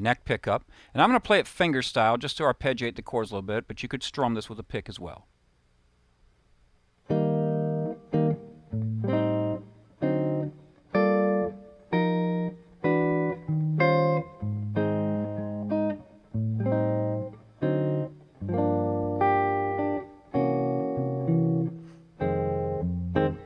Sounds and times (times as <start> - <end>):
Speech: 0.0 - 5.3
Inside, small room: 0.0 - 23.4
Guitar: 7.0 - 23.4.